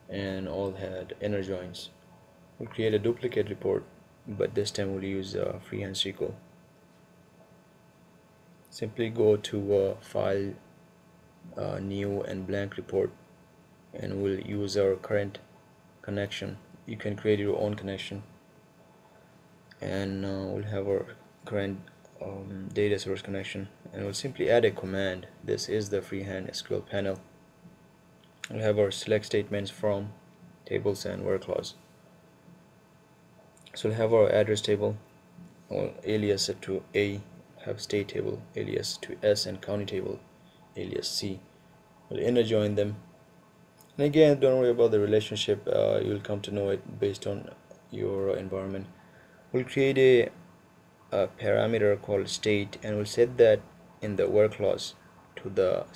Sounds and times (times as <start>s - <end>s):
Speech: 0.1s - 2.0s, 2.6s - 6.4s, 8.7s - 10.6s, 11.5s - 13.2s, 14.0s - 15.4s, 16.0s - 18.3s, 19.8s - 27.3s, 28.4s - 31.8s, 33.7s - 35.0s, 35.7s - 40.2s, 40.8s - 41.5s, 42.1s - 43.0s, 44.0s - 50.4s, 51.1s - 55.9s.